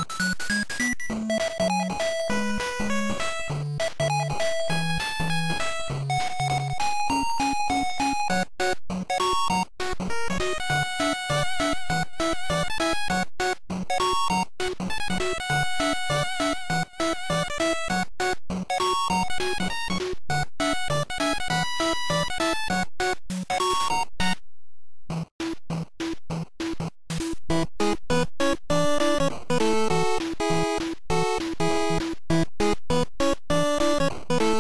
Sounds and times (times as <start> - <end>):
Music: 0.0 - 24.4, 25.1 - 34.6.